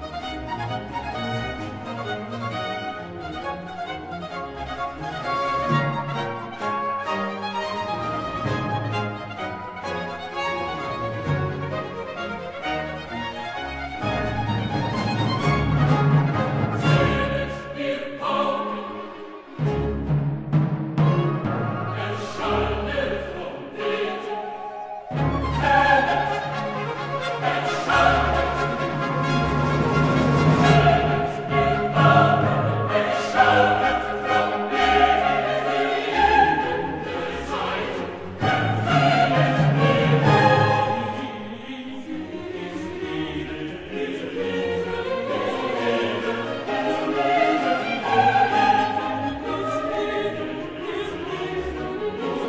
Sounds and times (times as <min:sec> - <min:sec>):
Music: 0:00.0 - 0:52.4.